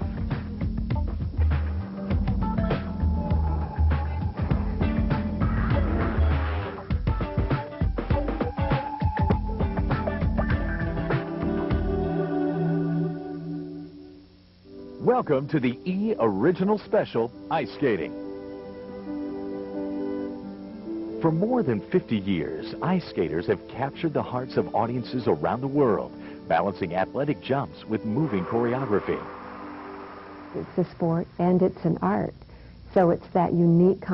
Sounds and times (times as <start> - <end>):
Music: 0.0 - 34.1
Speech: 15.0 - 18.1, 21.2 - 29.3, 30.8 - 32.3, 32.9 - 34.1.